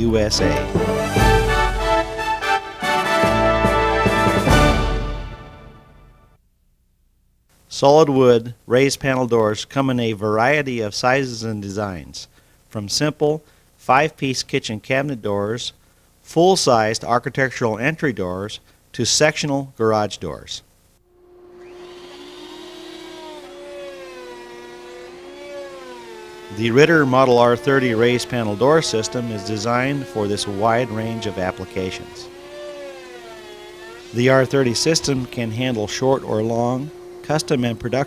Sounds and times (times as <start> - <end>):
Speech: 0.0 - 0.7, 7.7 - 20.7, 26.5 - 32.3, 34.1 - 38.0.